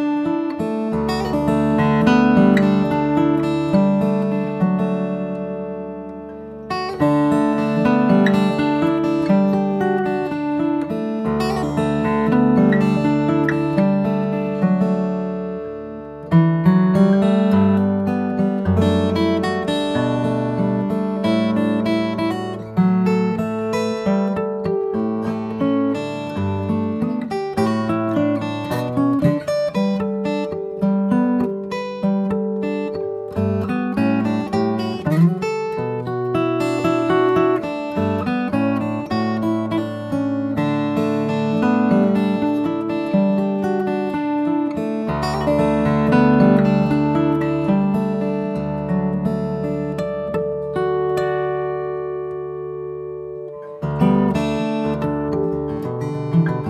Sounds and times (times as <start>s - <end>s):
Acoustic guitar: 0.0s - 56.7s.